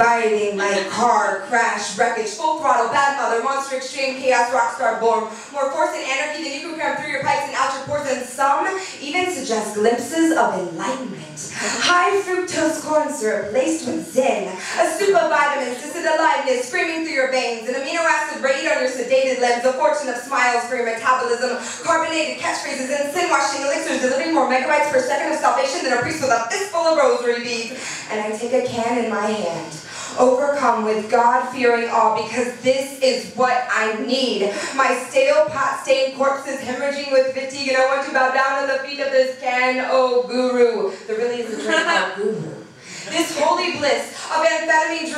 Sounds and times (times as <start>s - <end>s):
Speech: 0.0s - 45.1s.